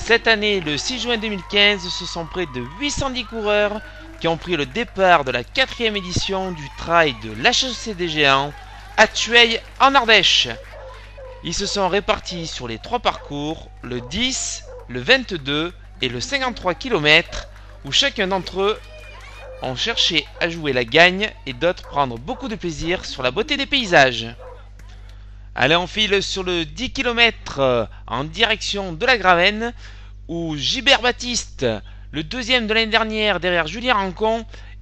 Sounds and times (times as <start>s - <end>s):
Speech: 0.0s - 10.6s, 11.4s - 18.9s, 19.6s - 24.4s, 25.6s - 34.6s
Run: 0.0s - 25.2s
Outside, urban or manmade: 0.0s - 34.8s.